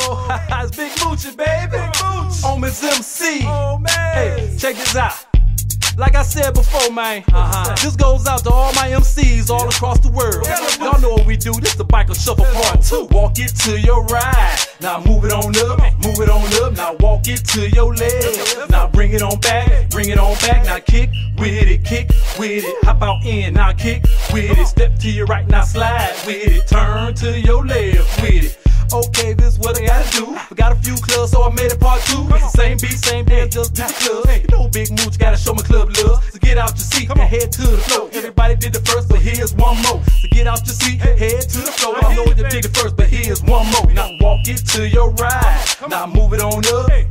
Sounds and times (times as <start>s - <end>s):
Music: 0.0s - 47.1s.